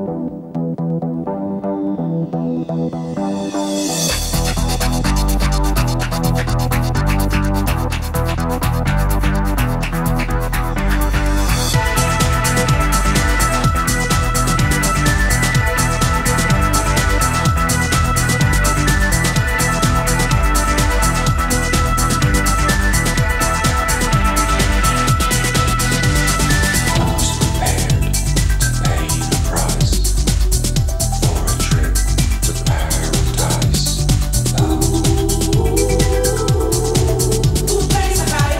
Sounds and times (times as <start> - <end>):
Music: 0.0 - 38.5.